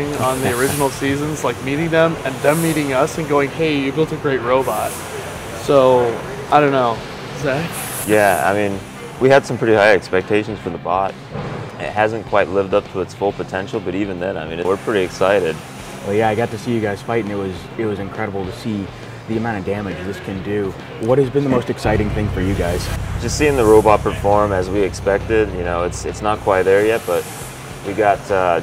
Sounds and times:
Speech: 0.0s - 5.0s, 5.6s - 11.1s, 11.8s - 27.2s, 27.9s - 28.6s.

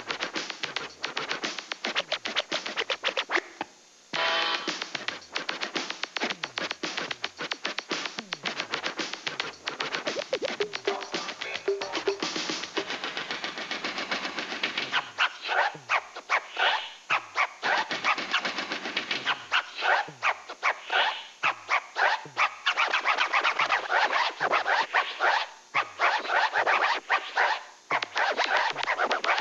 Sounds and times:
Scratching (performance technique): 0.0s - 29.4s.

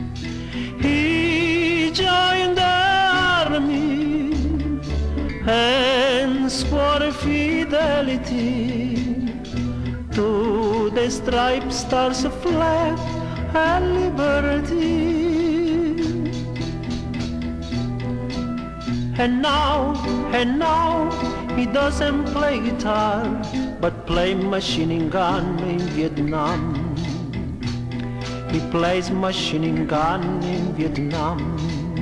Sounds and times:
Music: 0.0s - 32.0s.

